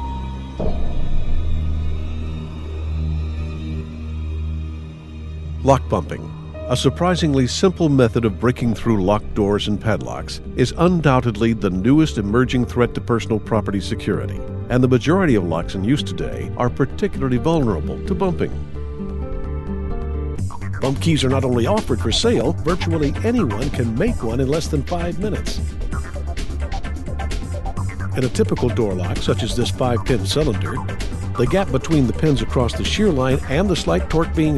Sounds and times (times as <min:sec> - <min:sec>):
Music: 0:00.0 - 0:34.5
Speech: 0:05.6 - 0:18.6, 0:20.8 - 0:25.6, 0:28.2 - 0:34.5.